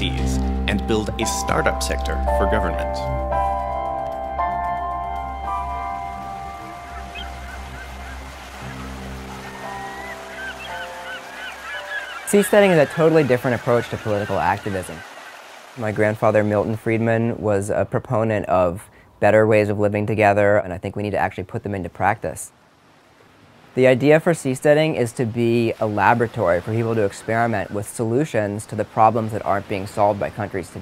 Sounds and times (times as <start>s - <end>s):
Speech: 0.0s - 3.1s, 12.3s - 15.0s, 15.8s - 22.5s, 23.8s - 30.8s.